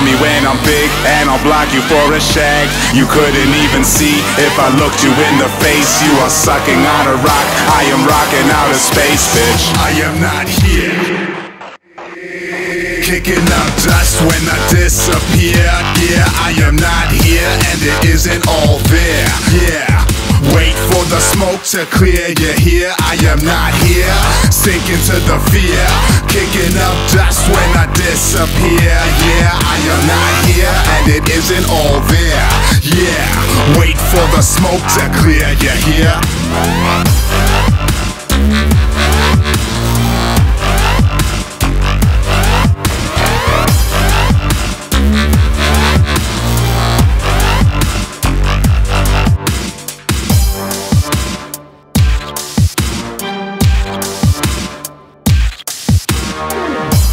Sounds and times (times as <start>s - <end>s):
Dubstep: 0.0s - 57.1s.